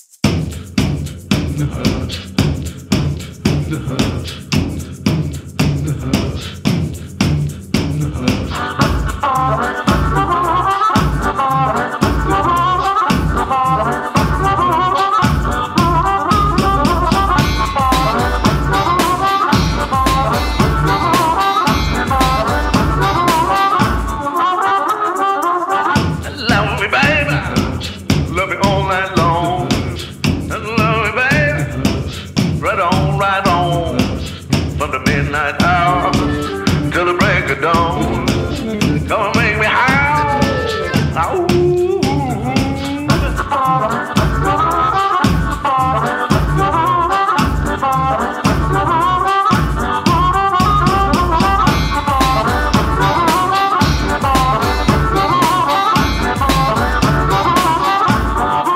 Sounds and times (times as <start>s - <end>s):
Music: 0.0s - 58.7s.